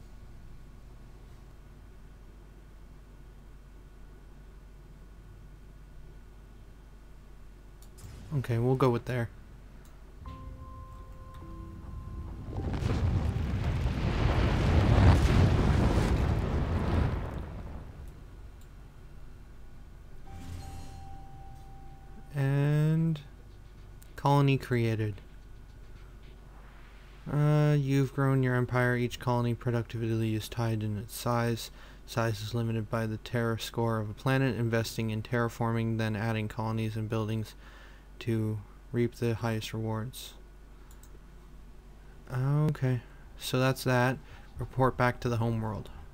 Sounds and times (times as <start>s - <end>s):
Speech: 8.3s - 9.4s, 22.3s - 23.3s, 24.2s - 25.3s, 27.3s - 37.6s, 38.2s - 40.4s, 42.3s - 46.0s
Eruption: 11.6s - 18.5s.